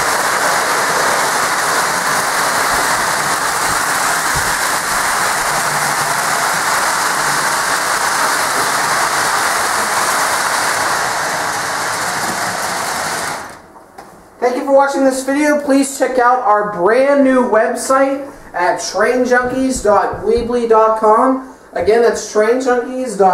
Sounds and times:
Train: 0.0 - 13.6
Speech: 14.4 - 23.3.

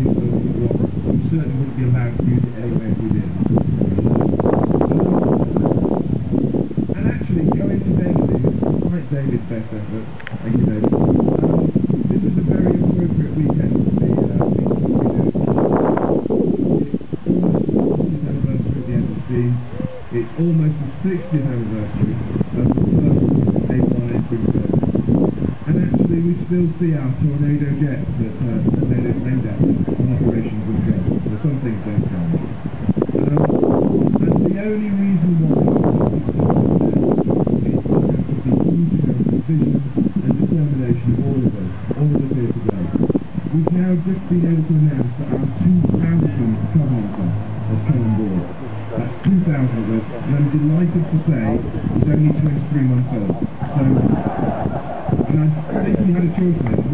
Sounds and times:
Speech: 0.0 - 4.1, 7.0 - 15.4, 18.0 - 24.8, 25.7 - 32.4, 33.2 - 33.5, 34.2 - 37.0, 37.6 - 54.2, 55.3 - 56.9.

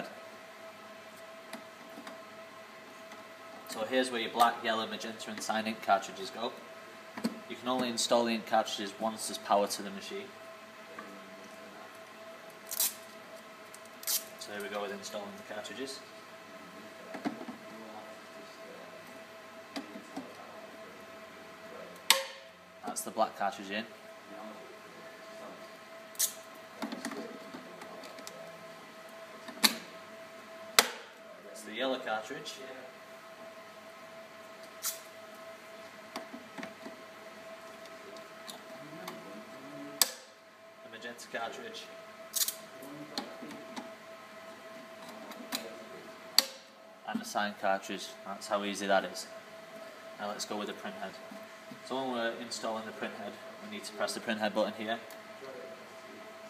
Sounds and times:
Speech: 3.7 - 6.6, 7.5 - 10.3, 14.4 - 16.1, 22.8 - 25.6, 31.4 - 33.0, 40.9 - 42.0, 47.1 - 49.3, 50.2 - 51.2, 51.8 - 55.8.

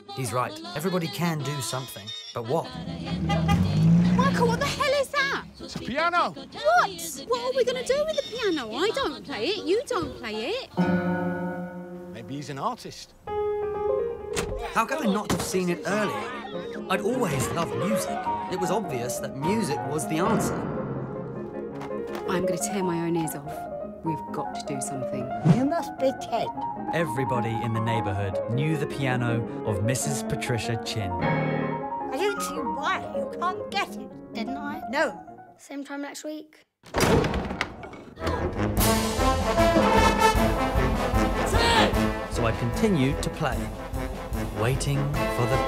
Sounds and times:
Piano: 13.2 - 35.5.

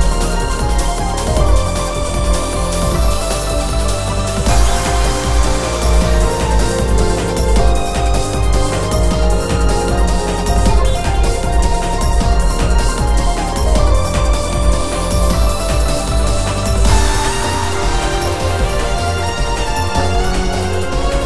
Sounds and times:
Exciting music: 0.0 - 21.2.

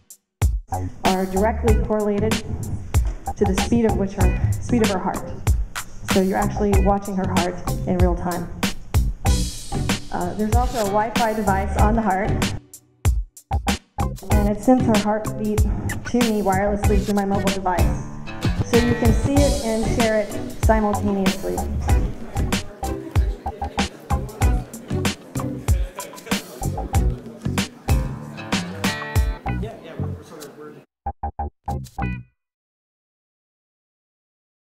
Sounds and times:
Music: 0.0 - 30.5, 31.2 - 32.4
Speech: 1.1 - 2.5, 3.4 - 5.3, 6.1 - 8.5, 10.1 - 12.4, 14.2 - 18.0, 18.6 - 28.1, 29.6 - 30.9.

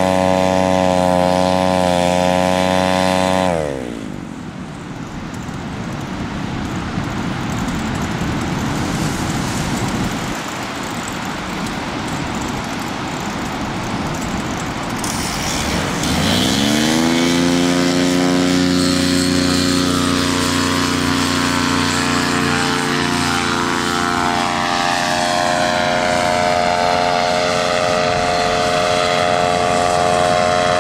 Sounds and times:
Wind: 0.0 - 30.8
Waves, surf: 0.1 - 16.4.

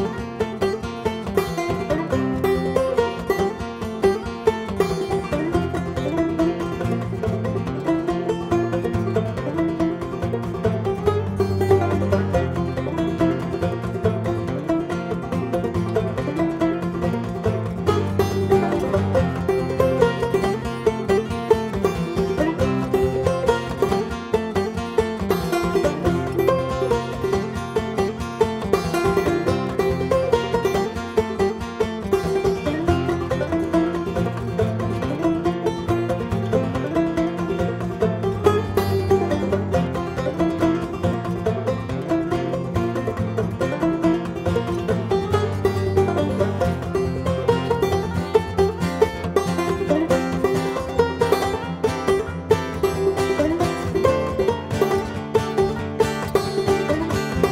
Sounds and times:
Banjo: 0.0 - 57.5
Bluegrass: 0.0 - 57.5.

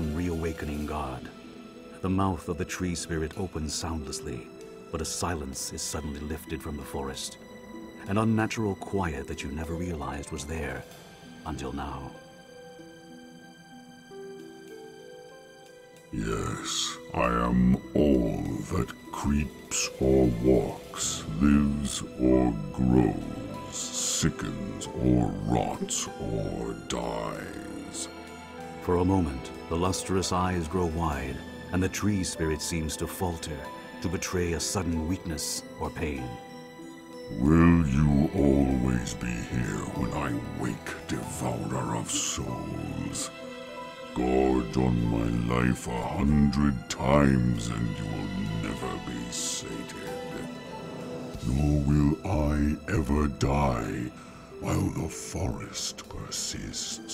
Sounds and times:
Speech: 0.0 - 7.4, 8.0 - 12.2, 16.1 - 28.1, 28.8 - 36.4, 37.3 - 43.3, 44.2 - 50.5, 51.4 - 57.1
Music: 0.0 - 57.1.

